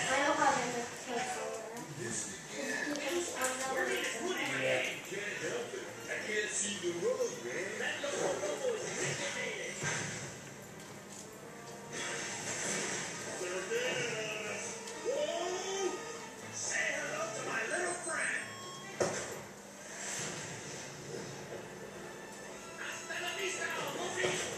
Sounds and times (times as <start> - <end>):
Music: 0.0 - 24.5.